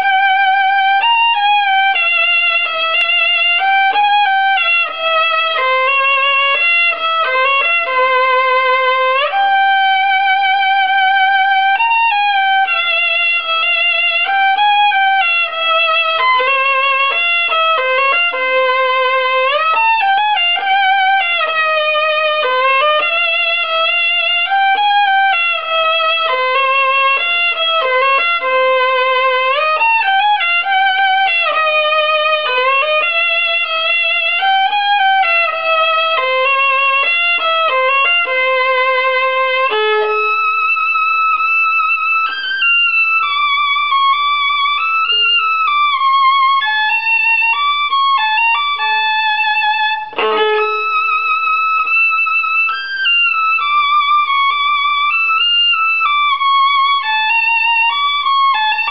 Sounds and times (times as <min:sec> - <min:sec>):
Violin, fiddle: 0:00.0 - 0:58.9.